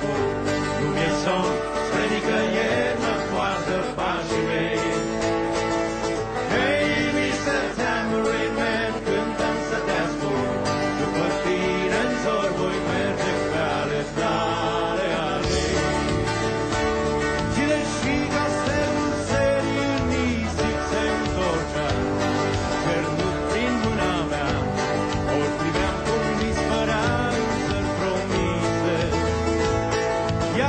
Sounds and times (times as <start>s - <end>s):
Musical instrument: 0.0s - 30.6s.